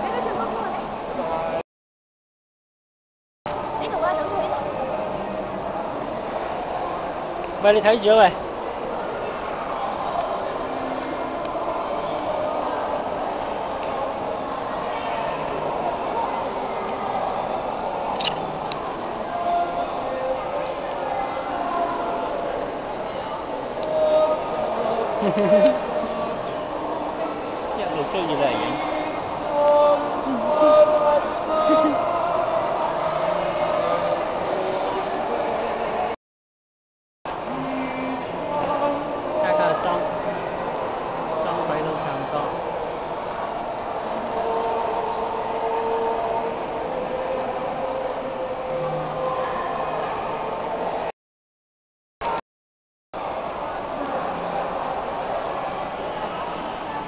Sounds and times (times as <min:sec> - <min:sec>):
Male singing: 0:19.2 - 0:22.5, 0:23.7 - 0:27.3, 0:28.5 - 0:36.2, 0:37.4 - 0:40.6, 0:44.1 - 0:50.5.